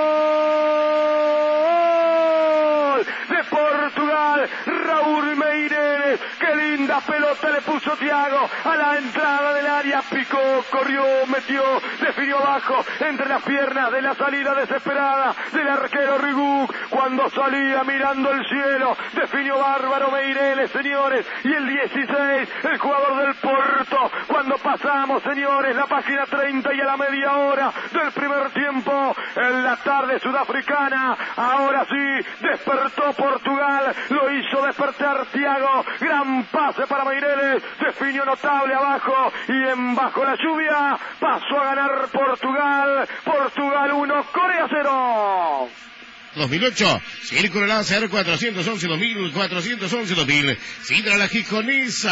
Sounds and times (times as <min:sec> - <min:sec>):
Radio: 0:02.8 - 0:52.1.